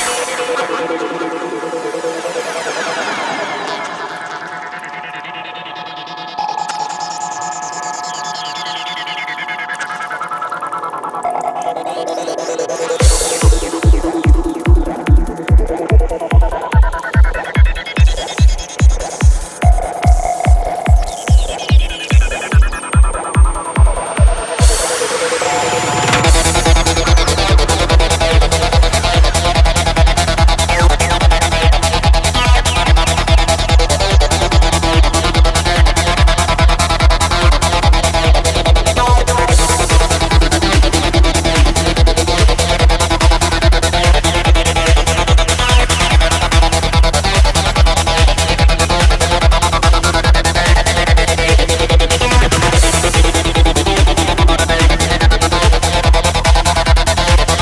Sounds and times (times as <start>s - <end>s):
Throbbing: 0.0s - 57.6s.